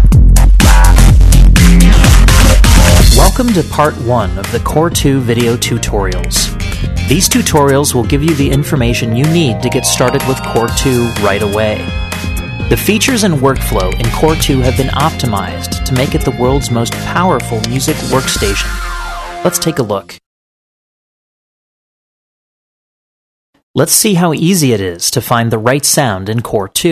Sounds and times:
Music: 0.0 - 20.2
Speech: 3.1 - 6.5, 7.1 - 11.9, 12.7 - 18.7, 19.4 - 20.2, 23.8 - 26.9.

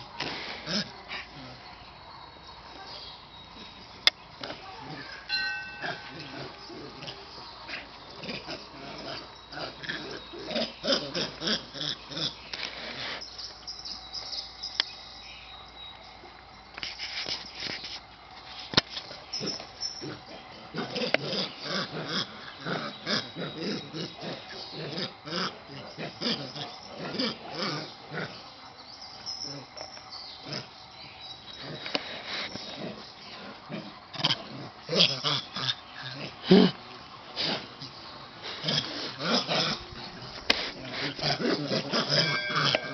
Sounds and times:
Domestic animals, pets: 0.0 - 14.9, 19.0 - 42.9.

